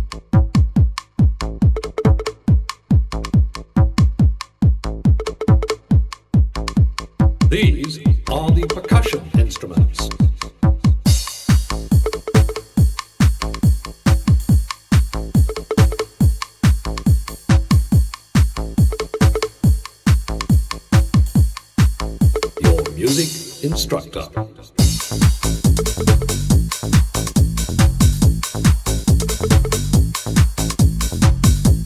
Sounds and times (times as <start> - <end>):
House music: 1.6 - 6.2, 6.8 - 31.8.